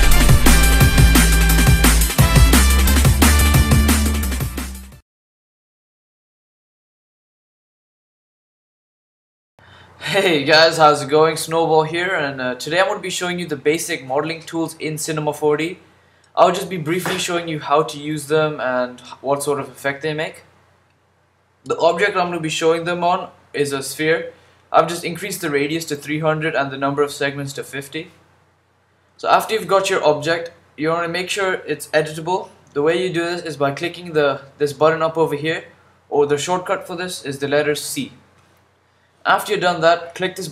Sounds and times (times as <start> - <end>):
Speech: 10.0 - 15.8, 16.4 - 20.5, 21.7 - 28.2, 29.2 - 38.2, 39.2 - 40.5.